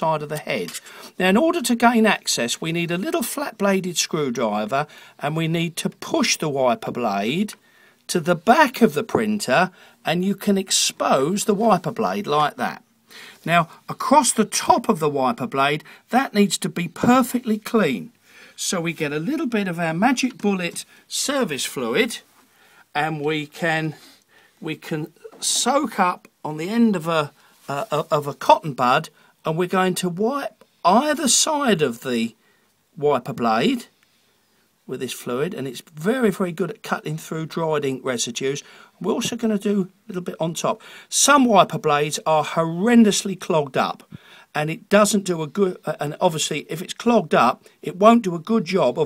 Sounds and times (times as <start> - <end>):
Speech: 0.0 - 12.8, 13.4 - 22.3, 22.9 - 32.4, 33.0 - 33.9, 34.9 - 49.0.